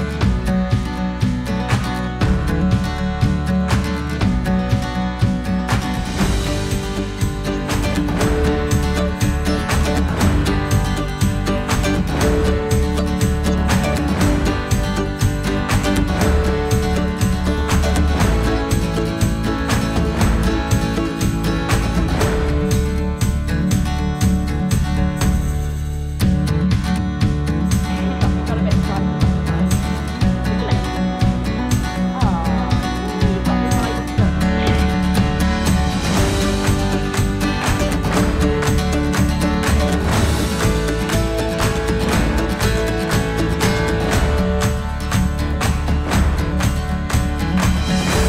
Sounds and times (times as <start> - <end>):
Music: 0.0 - 48.2
Speech: 27.9 - 31.0, 32.1 - 34.8.